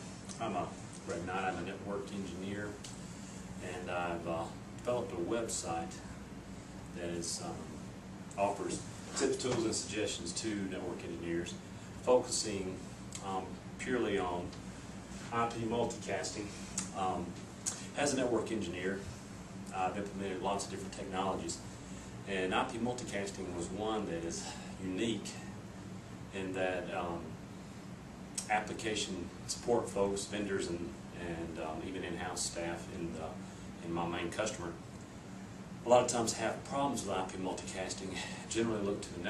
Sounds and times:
Speech: 0:00.3 - 0:02.9, 0:03.6 - 0:06.2, 0:07.0 - 0:07.8, 0:08.4 - 0:14.6, 0:15.2 - 0:17.4, 0:18.0 - 0:19.1, 0:19.7 - 0:21.6, 0:22.3 - 0:25.6, 0:26.3 - 0:27.4, 0:28.4 - 0:34.8, 0:35.8 - 0:39.3.

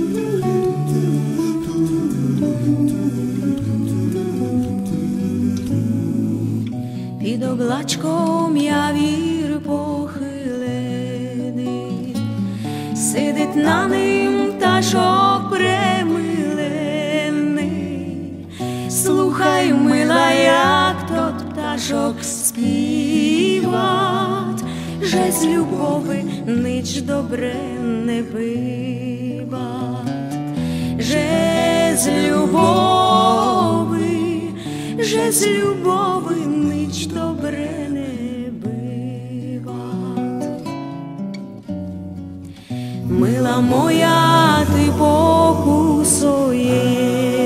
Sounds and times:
Music: 0:00.0 - 0:47.4.

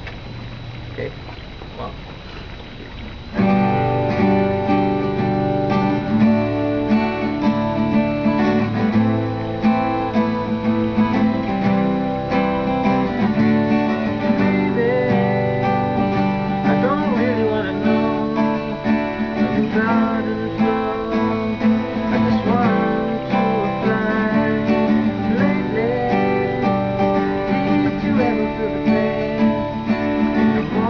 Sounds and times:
Acoustic guitar: 0:00.0 - 0:30.9
Strum: 0:02.0 - 0:30.9.

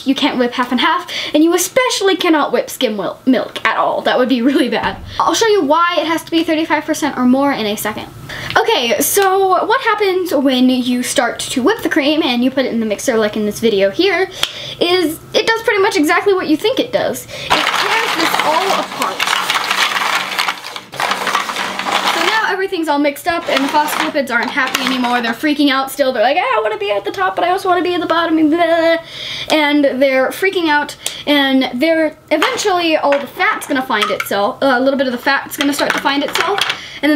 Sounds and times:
Child speech, kid speaking: 0:00.0 - 0:19.3, 0:22.2 - 0:37.1.

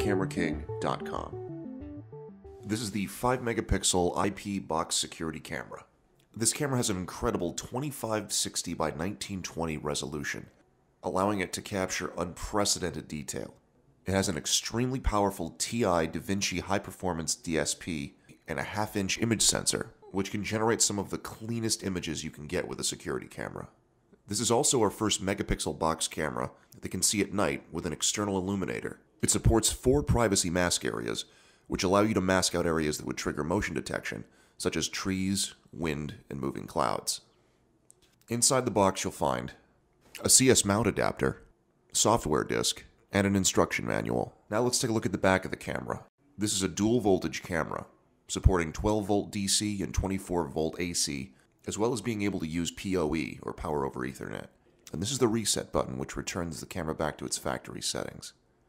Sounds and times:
Speech: 0:00.0 - 0:01.4, 0:02.6 - 0:37.3, 0:38.2 - 0:58.4.

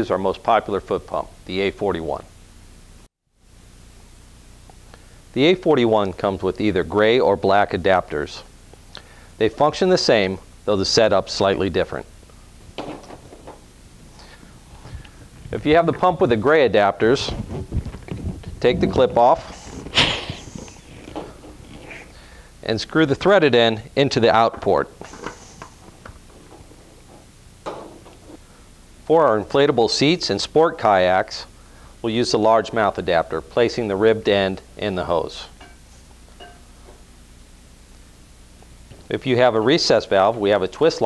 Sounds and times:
Speech: 0:00.0 - 0:02.3, 0:05.4 - 0:08.5, 0:09.4 - 0:12.1, 0:15.5 - 0:17.5, 0:18.6 - 0:19.8, 0:22.6 - 0:25.0, 0:29.1 - 0:35.6, 0:39.1 - 0:41.0.

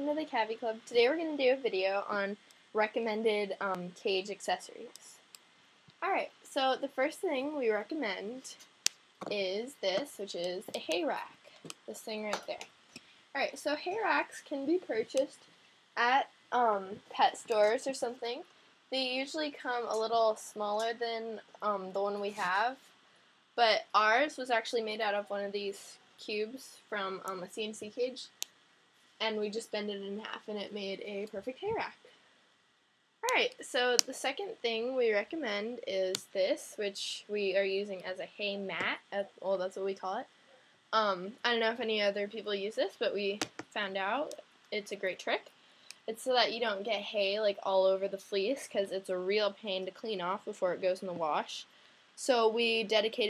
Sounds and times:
Speech: 0:00.0 - 0:05.2, 0:06.0 - 0:08.6, 0:09.2 - 0:12.7, 0:13.4 - 0:15.4, 0:16.0 - 0:22.8, 0:23.6 - 0:28.4, 0:29.2 - 0:32.1, 0:33.2 - 0:40.3, 0:41.0 - 0:53.2.

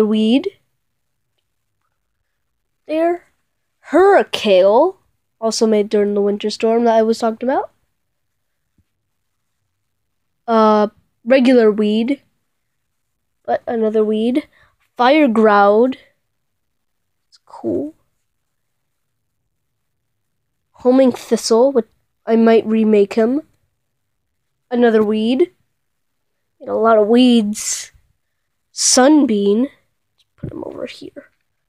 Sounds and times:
Speech: 0:00.0 - 0:00.6, 0:02.9 - 0:07.8, 0:10.5 - 0:12.3, 0:13.5 - 0:16.1, 0:17.4 - 0:18.0, 0:20.8 - 0:23.6, 0:24.7 - 0:25.6, 0:26.6 - 0:28.0, 0:28.8 - 0:29.8, 0:30.4 - 0:31.4.

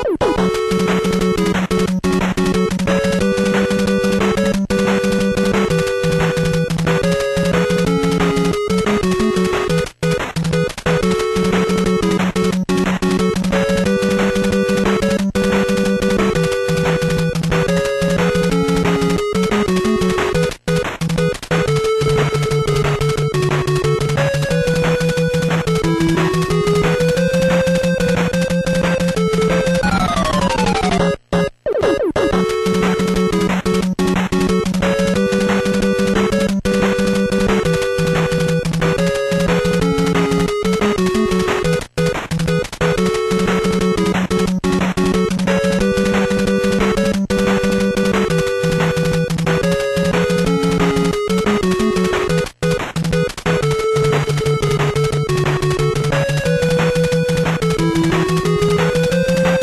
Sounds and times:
Music: 0:00.0 - 0:59.6.

